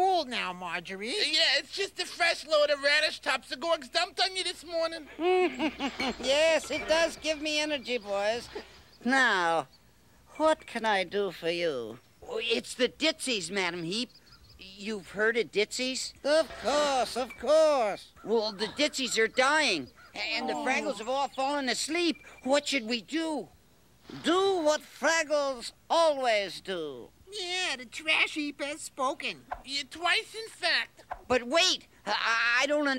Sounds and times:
Speech: 0:00.0 - 0:05.2, 0:06.2 - 0:09.7, 0:10.3 - 0:23.5, 0:24.1 - 0:32.9.

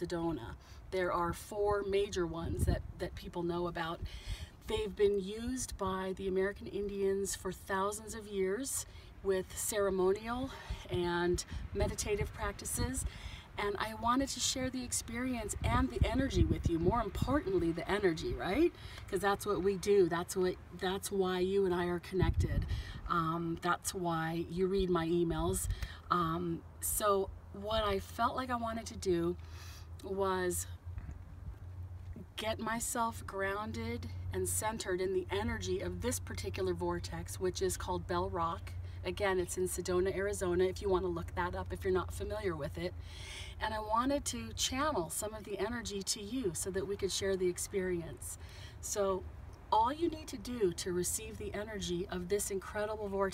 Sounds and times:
Speech: 0:00.0 - 0:04.0, 0:04.6 - 0:29.4, 0:30.0 - 0:30.7, 0:32.2 - 0:42.9, 0:43.6 - 0:49.2, 0:49.8 - 0:53.3.

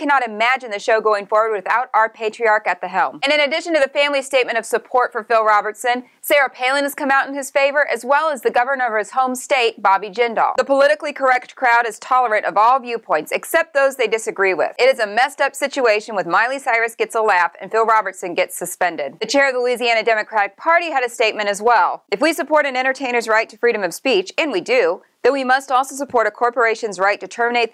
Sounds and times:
Speech: 0:00.0 - 0:27.7.

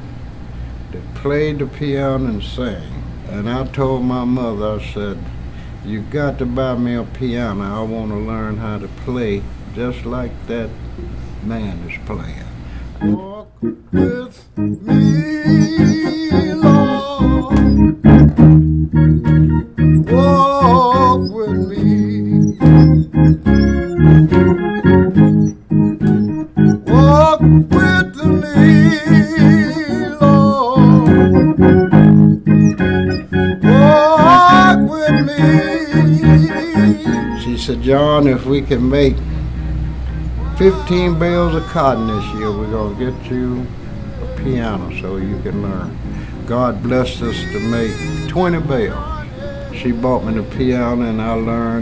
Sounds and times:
Hammond organ: 0:12.8 - 0:51.8.

